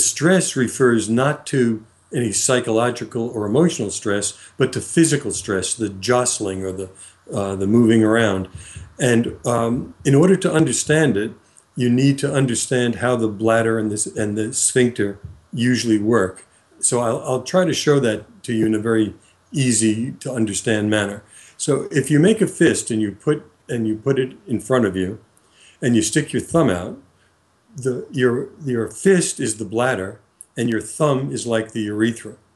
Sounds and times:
Speech: 0.0s - 25.2s, 25.8s - 27.0s, 27.8s - 32.4s.

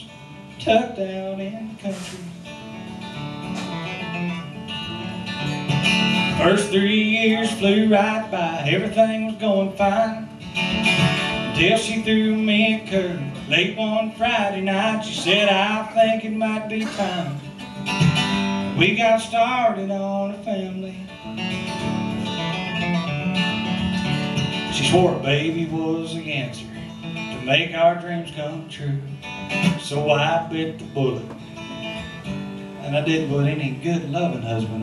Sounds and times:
Music: 0.0s - 34.8s.

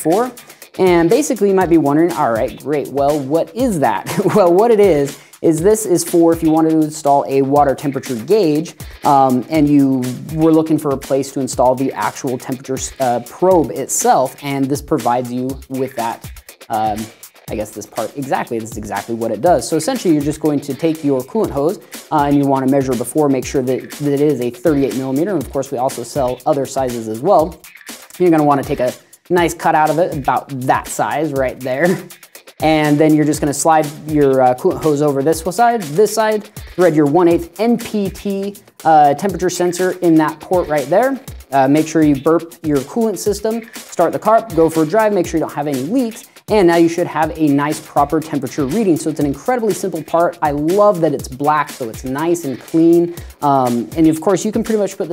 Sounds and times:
Speech: 0.0s - 27.6s, 28.2s - 55.1s
Music: 0.0s - 55.1s.

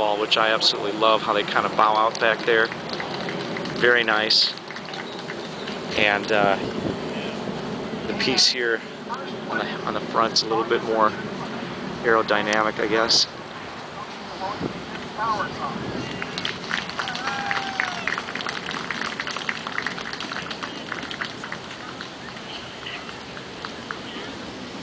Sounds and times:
Outside, urban or manmade: 0.0s - 24.8s
Speech: 3.8s - 4.6s.

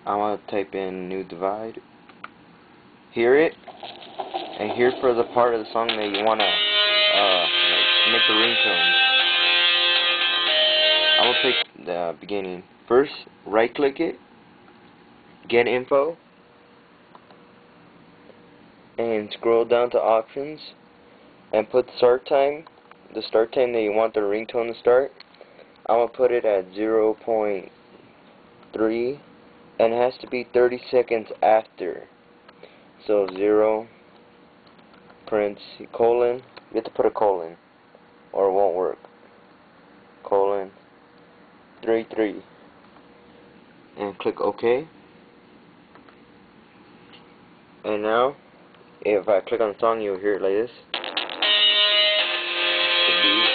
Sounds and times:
Speech: 0.0s - 1.8s, 3.1s - 3.6s, 4.6s - 6.5s, 7.2s - 8.9s, 11.2s - 14.2s, 15.4s - 16.2s, 19.0s - 20.8s, 21.5s - 25.2s, 25.8s - 27.8s, 28.7s - 32.1s, 33.0s - 33.9s, 35.3s - 37.6s, 38.3s - 39.0s, 40.2s - 40.8s, 41.8s - 42.5s, 44.0s - 45.0s, 47.8s - 48.4s, 49.0s - 50.9s, 53.1s - 53.5s
Music: 6.3s - 11.7s, 51.2s - 53.5s.

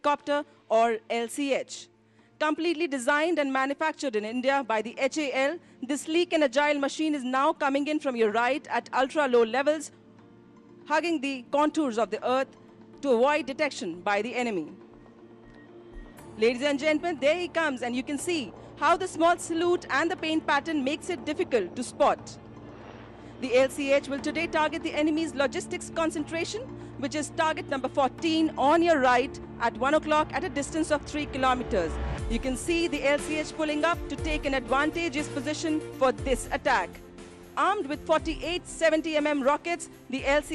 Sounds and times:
Speech: 0.0s - 9.9s, 10.9s - 14.8s, 16.4s - 22.4s, 23.4s - 36.9s, 37.6s - 40.5s
Music: 0.0s - 40.5s
Helicopter: 16.2s - 28.5s.

